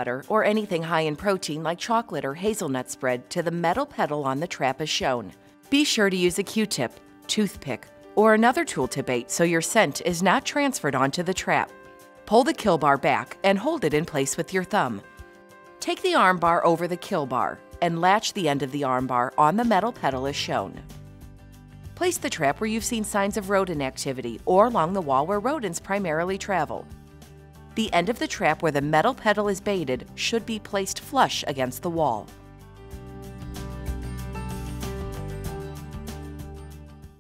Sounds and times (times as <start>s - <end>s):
Speech: 0.0s - 11.7s, 12.3s - 15.0s, 15.8s - 20.8s, 22.0s - 26.9s, 27.8s - 32.3s
Music: 0.0s - 37.2s.